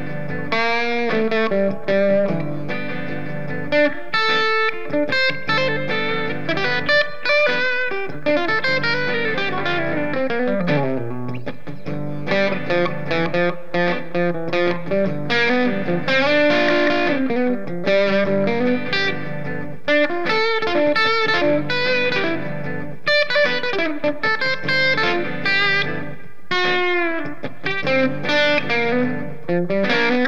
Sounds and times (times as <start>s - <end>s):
Bass guitar: 0.0s - 23.1s.